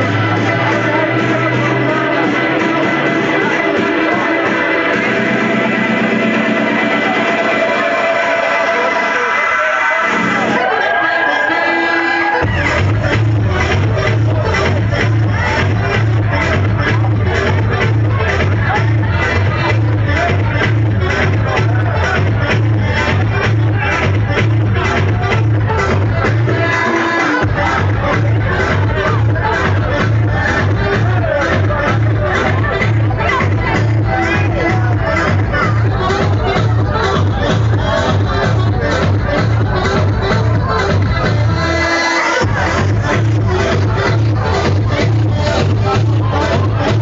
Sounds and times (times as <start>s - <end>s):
House music: 0.0s - 47.0s.